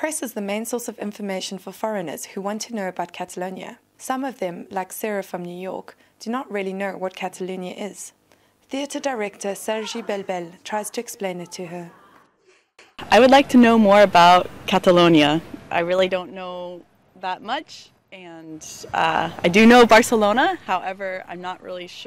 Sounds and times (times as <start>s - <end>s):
Speech: 8.7s - 12.2s.